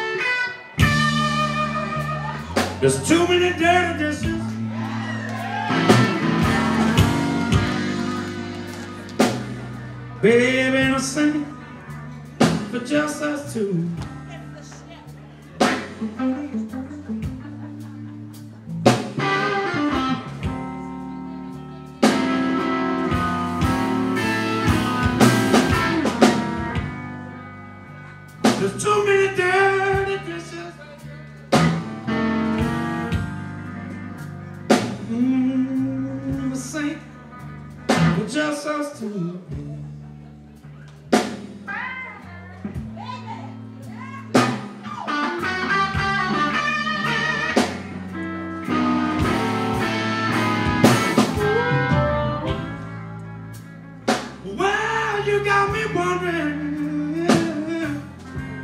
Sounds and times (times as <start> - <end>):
Music: 0.0 - 58.6.